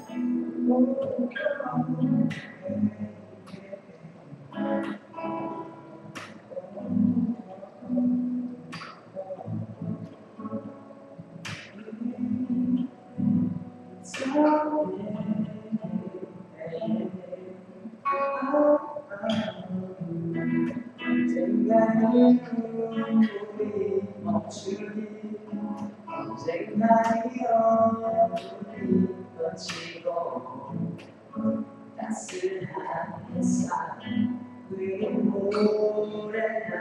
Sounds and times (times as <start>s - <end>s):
Male singing: 0.0s - 10.6s, 11.6s - 13.4s, 14.0s - 36.8s
Music: 0.0s - 36.8s.